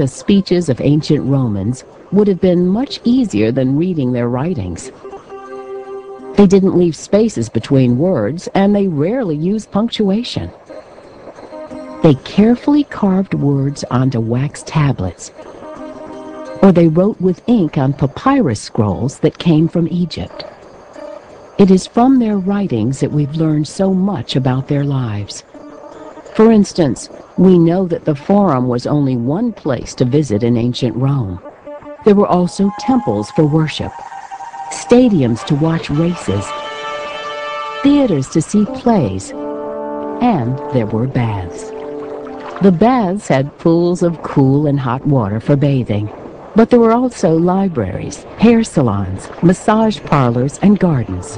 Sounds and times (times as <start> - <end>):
Speech synthesizer: 0.0 - 4.9, 6.4 - 10.6, 12.1 - 15.3, 16.6 - 20.4, 21.6 - 25.4, 26.4 - 31.4, 32.1 - 34.0, 34.8 - 36.5, 37.9 - 39.4, 40.2 - 41.7, 42.6 - 51.3.